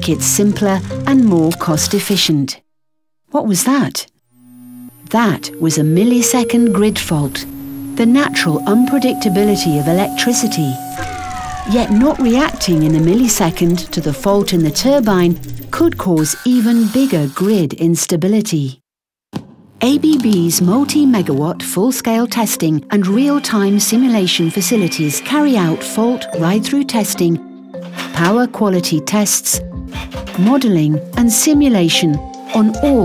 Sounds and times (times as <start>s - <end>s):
Speech: 0.0s - 2.6s, 3.3s - 4.1s, 5.1s - 10.9s, 11.6s - 18.8s, 19.8s - 27.4s, 28.1s - 29.6s, 30.4s - 33.0s.